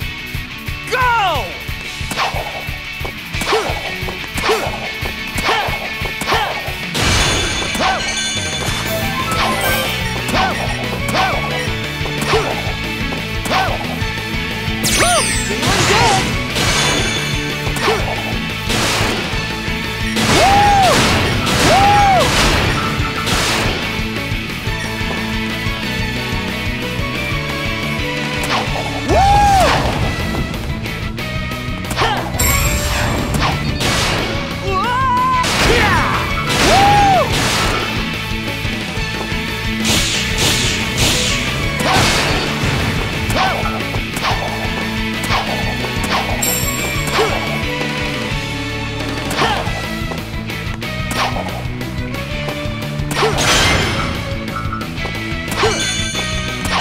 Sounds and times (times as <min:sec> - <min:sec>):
Music: 0:00.0 - 0:56.8.